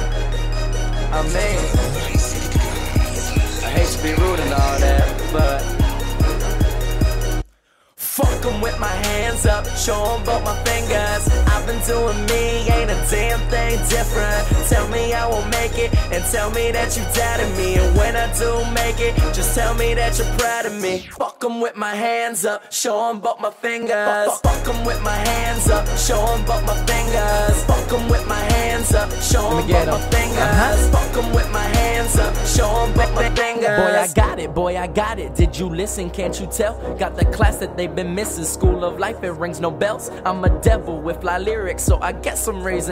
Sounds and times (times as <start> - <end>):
Exciting music: 0.0 - 7.4, 8.2 - 20.9, 24.4 - 42.6
Background music: 0.0 - 21.2, 23.3 - 42.9.